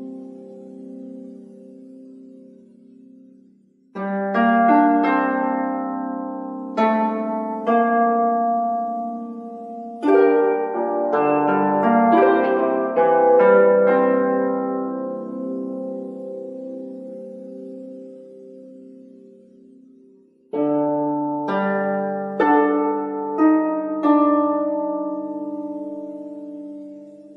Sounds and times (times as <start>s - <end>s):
Music: 0.0s - 27.3s.